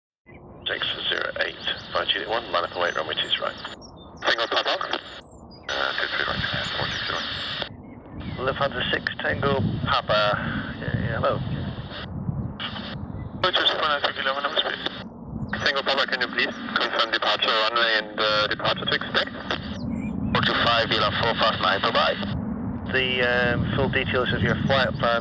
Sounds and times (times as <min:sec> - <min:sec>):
Radio: 0:00.7 - 0:25.2.